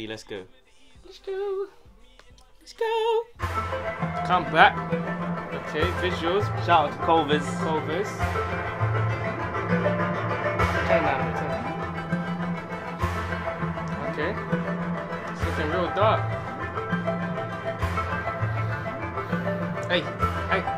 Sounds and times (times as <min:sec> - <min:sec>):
Speech: 0:00.0 - 0:00.5, 0:04.3 - 0:04.8, 0:05.6 - 0:08.2, 0:14.0 - 0:14.4, 0:15.4 - 0:16.2, 0:19.9 - 0:20.7
Music: 0:00.0 - 0:20.7.